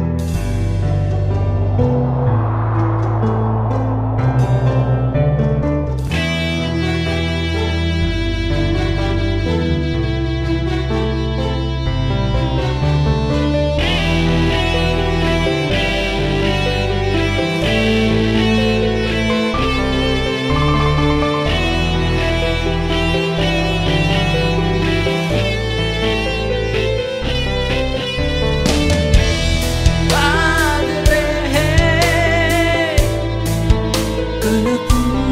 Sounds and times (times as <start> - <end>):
Music: 0.0 - 35.3.